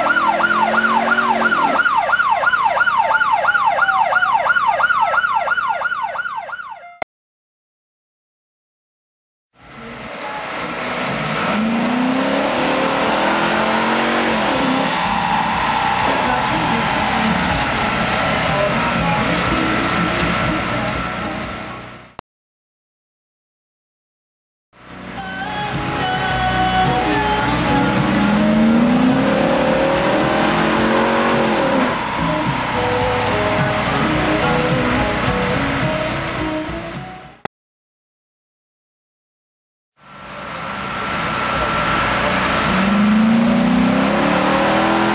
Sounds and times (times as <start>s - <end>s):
Car: 0.0s - 6.6s, 9.6s - 22.2s, 24.8s - 37.5s, 40.0s - 45.1s.